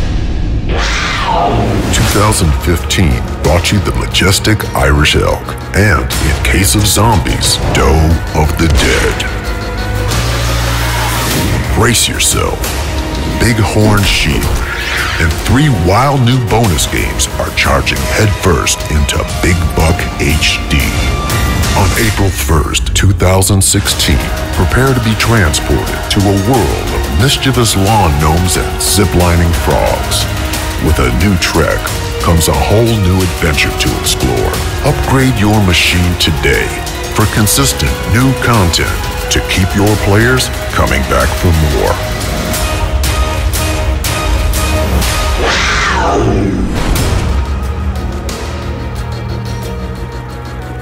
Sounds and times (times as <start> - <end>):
Music: 0.0 - 50.8
Speech: 1.5 - 9.4, 11.7 - 12.6, 13.4 - 14.6, 15.2 - 21.2, 21.8 - 42.0.